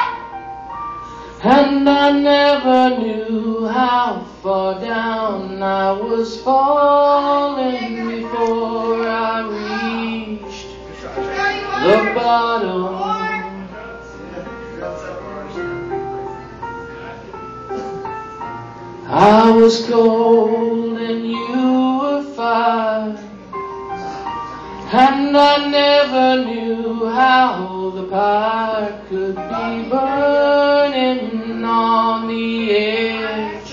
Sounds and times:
Music: 0:00.0 - 0:33.7.

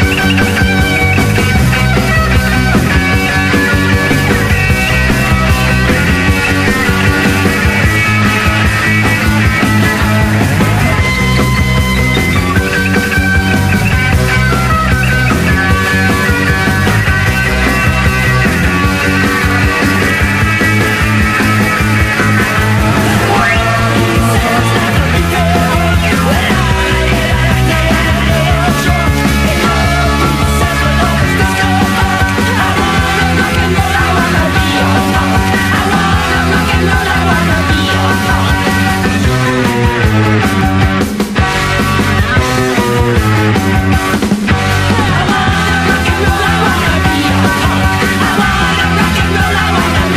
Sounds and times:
Rock and roll: 0:00.0 - 0:50.1.

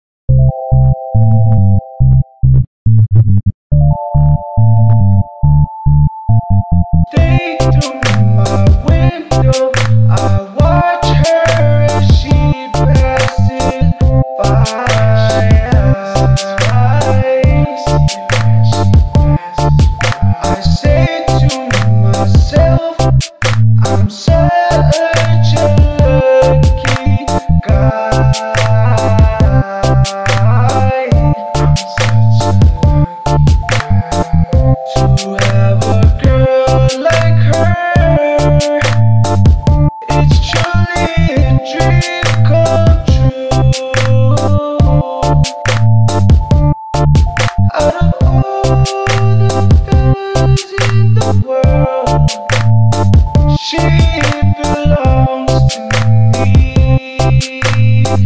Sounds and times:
Music: 0:03.8 - 0:58.2.

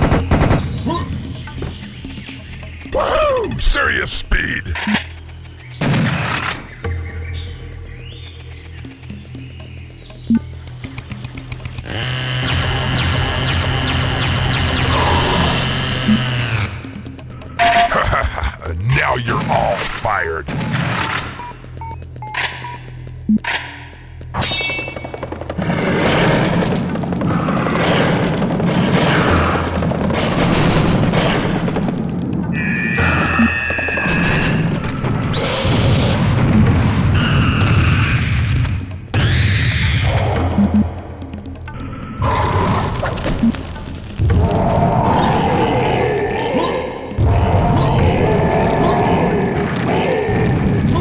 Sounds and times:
Music: 0:00.0 - 0:51.0.

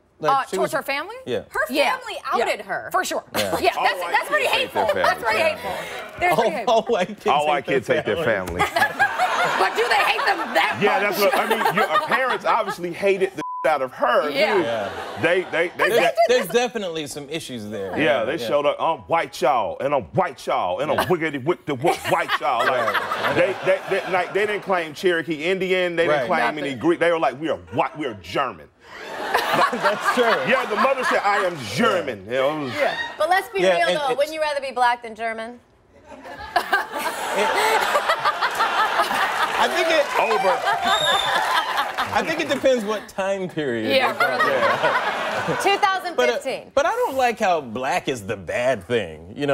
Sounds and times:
Female speech, woman speaking: 0:00.2 - 0:07.6, 0:09.6 - 0:11.0, 0:14.2 - 0:14.6, 0:26.1 - 0:26.7, 0:33.2 - 0:35.6, 0:43.8 - 0:44.5, 0:45.6 - 0:46.8.

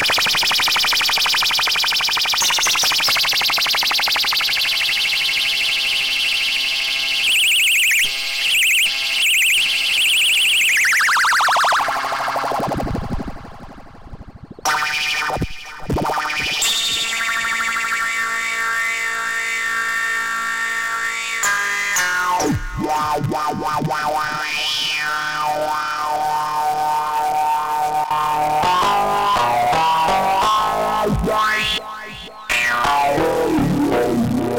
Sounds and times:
Synthesizer: 0:00.0 - 0:34.5.

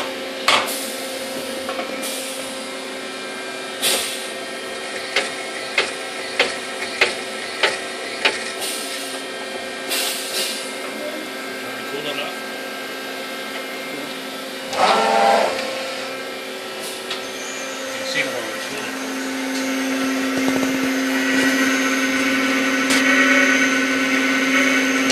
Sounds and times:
Speech: 0:11.0 - 0:12.4, 0:18.1 - 0:19.0.

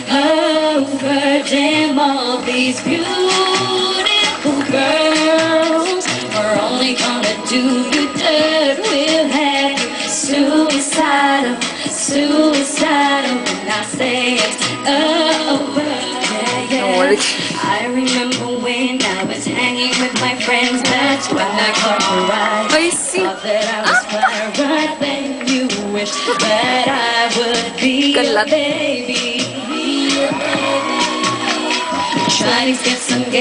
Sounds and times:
Female singing: 0:00.0 - 0:31.4, 0:32.1 - 0:33.4
Music: 0:00.0 - 0:33.4
Speech: 0:16.7 - 0:17.4, 0:22.7 - 0:24.4, 0:28.1 - 0:28.6.

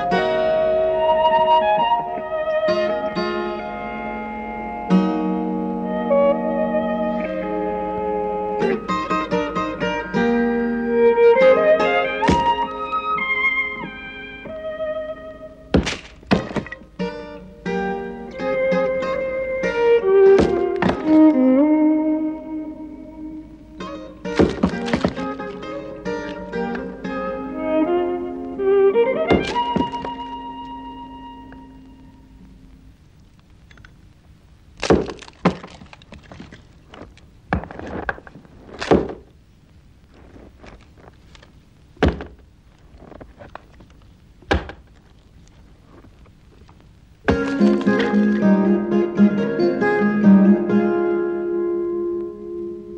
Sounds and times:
Chop: 0:12.3 - 0:12.5, 0:15.8 - 0:16.8, 0:20.4 - 0:21.0, 0:24.4 - 0:25.2.

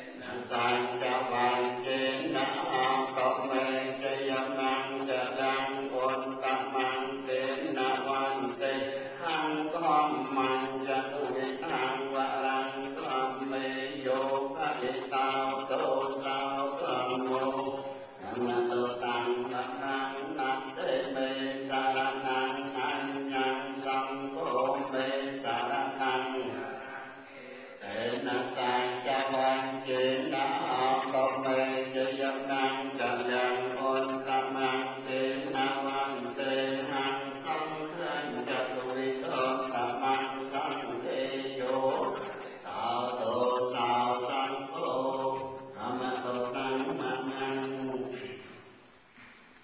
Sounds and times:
Mantra: 0:00.0 - 0:48.5.

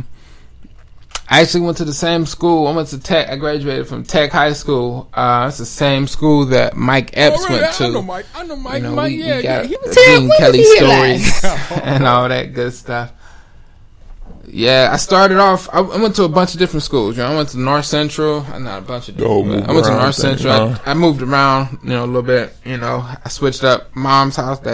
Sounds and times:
Speech: 0:01.3 - 0:13.1, 0:14.5 - 0:24.7.

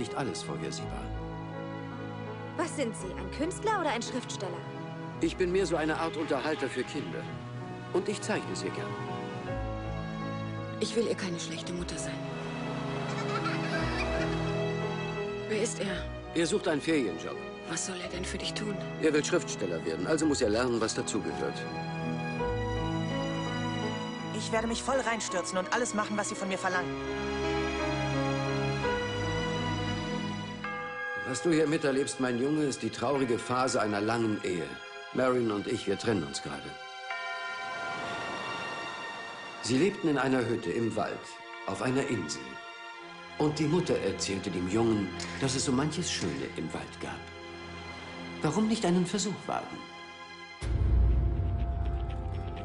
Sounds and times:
Music: 0:00.0 - 0:52.6.

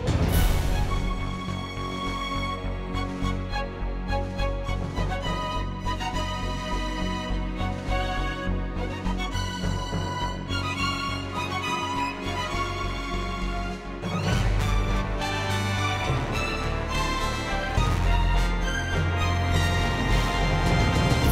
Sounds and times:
Music: 0:00.0 - 0:21.3.

